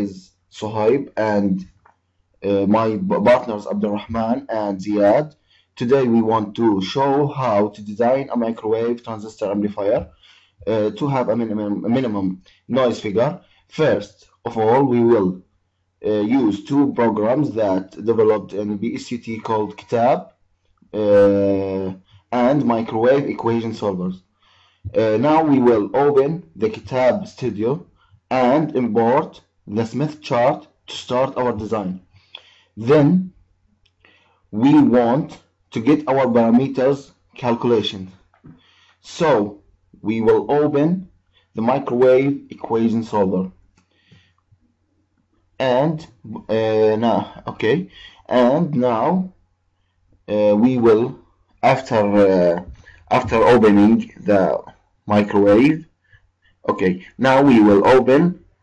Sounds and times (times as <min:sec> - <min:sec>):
Speech: 0:00.0 - 0:01.8, 0:02.4 - 0:15.4, 0:16.0 - 0:20.3, 0:21.0 - 0:24.2, 0:24.9 - 0:32.0, 0:32.8 - 0:33.3, 0:34.6 - 0:38.2, 0:39.0 - 0:43.5, 0:45.6 - 0:49.4, 0:50.3 - 0:55.9, 0:56.6 - 0:58.4.